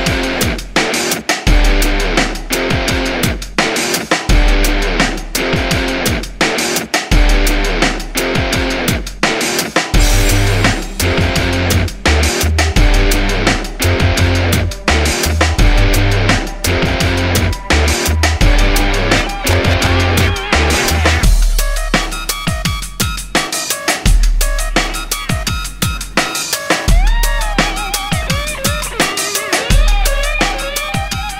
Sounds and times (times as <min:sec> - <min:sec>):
Drum and bass: 0:00.0 - 0:31.3.